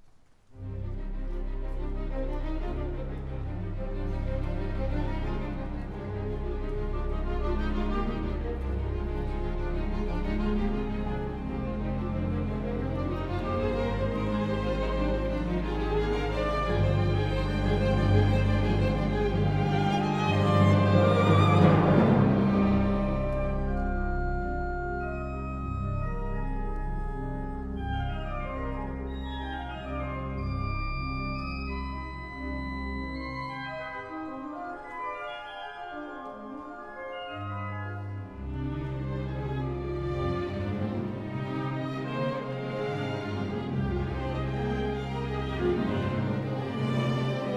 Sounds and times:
Percussion: 4.2 - 47.5.

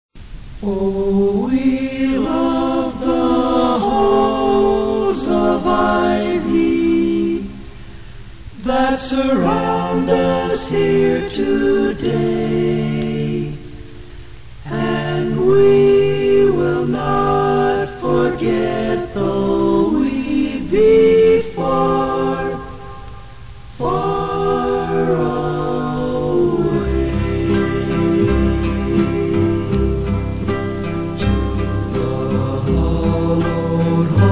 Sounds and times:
Chant: 0.6 - 7.7, 8.6 - 14.0, 14.6 - 34.3.

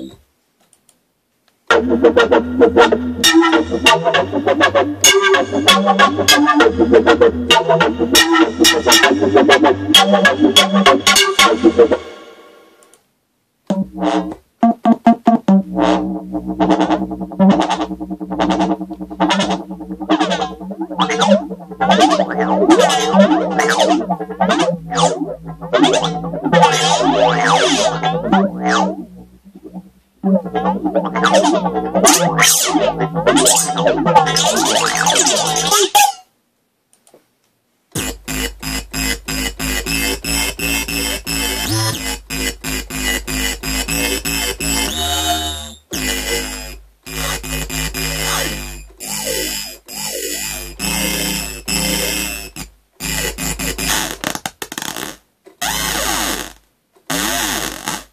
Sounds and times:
Electronic music: 0.0 - 0.2, 1.7 - 12.6, 13.7 - 36.1, 38.0 - 54.3.

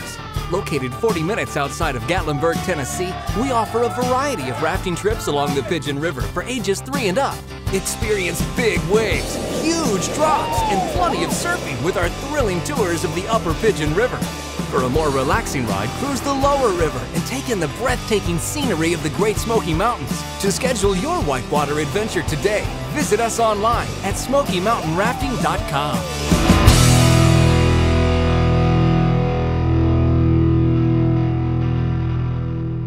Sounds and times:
Speech: 0.0 - 26.2
Music: 0.0 - 32.8.

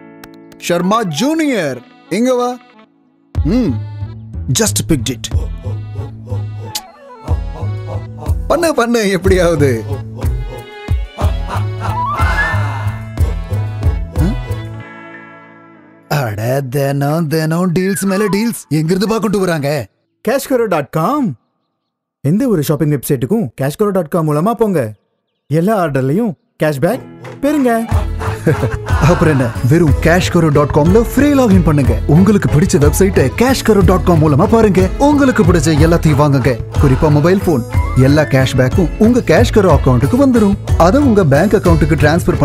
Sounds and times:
Speech: 0.6 - 2.6, 3.4 - 3.8, 4.5 - 5.5, 8.5 - 10.0, 16.1 - 21.4, 22.3 - 27.9, 29.0 - 42.4.

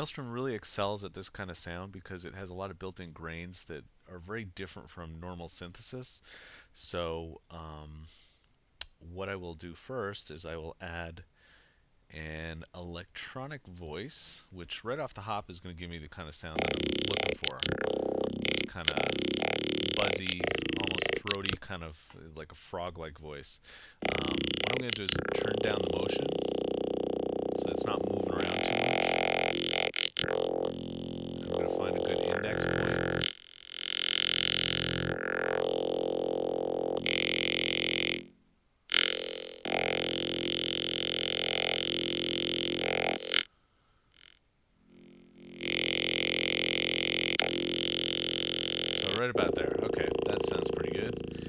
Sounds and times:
Speech: 0.0 - 8.1, 8.8 - 11.3, 12.1 - 17.9, 18.5 - 26.5, 27.6 - 29.2, 31.4 - 33.2, 49.0 - 51.4
Music: 16.6 - 21.6, 24.0 - 43.5, 44.9 - 51.4.

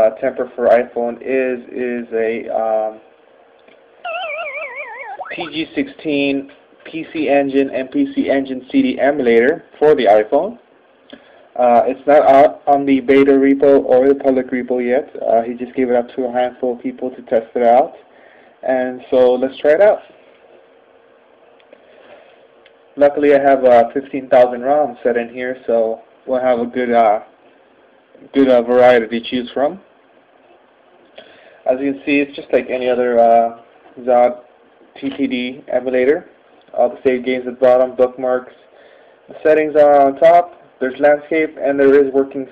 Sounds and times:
Speech: 0.0 - 3.1, 5.3 - 10.6, 11.6 - 18.0, 18.6 - 20.1, 23.0 - 27.4, 28.2 - 29.9, 31.6 - 38.7, 39.3 - 42.5.

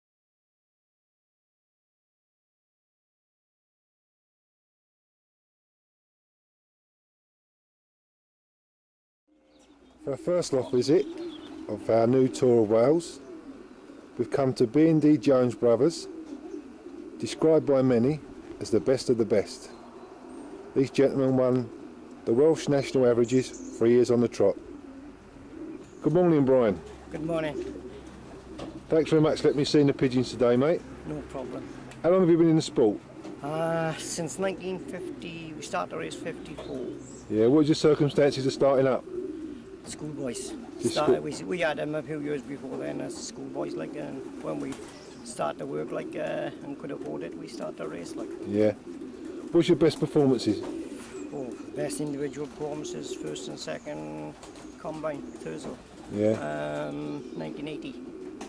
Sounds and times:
Bird: 9.3 - 58.4
Speech: 10.1 - 11.1, 11.7 - 13.2, 14.2 - 16.1, 17.2 - 19.8, 20.8 - 21.7, 22.3 - 24.6, 26.0 - 27.7, 28.9 - 39.0, 39.9 - 48.8, 49.5 - 50.7, 51.4 - 58.0.

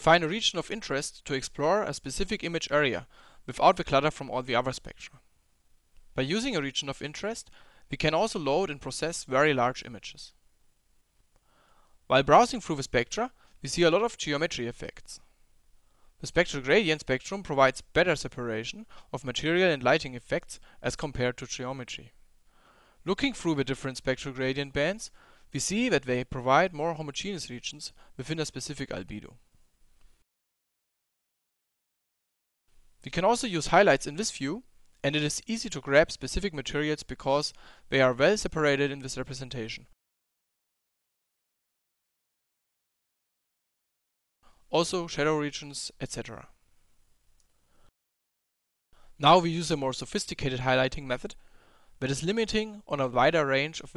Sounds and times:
Speech: 0.0 - 5.2, 6.2 - 10.4, 12.1 - 15.3, 16.2 - 22.2, 23.0 - 29.4, 33.0 - 40.0, 44.7 - 46.6, 49.2 - 51.4, 52.0 - 53.9.

